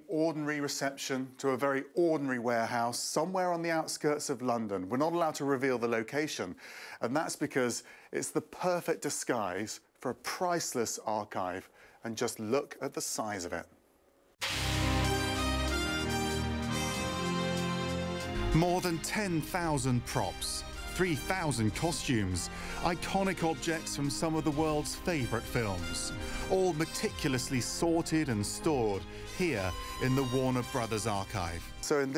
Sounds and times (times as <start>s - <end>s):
Speech: 0.0s - 13.8s, 18.5s - 32.1s
Music: 14.4s - 32.1s.